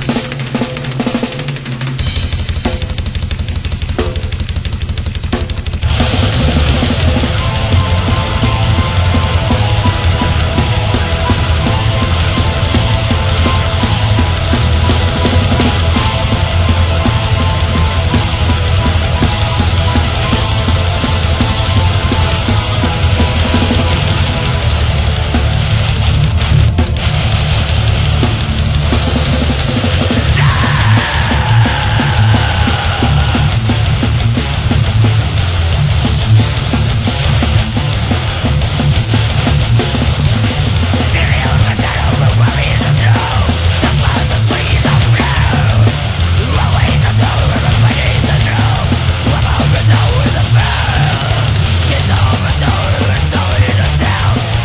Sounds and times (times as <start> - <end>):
Music: 0.0 - 54.6.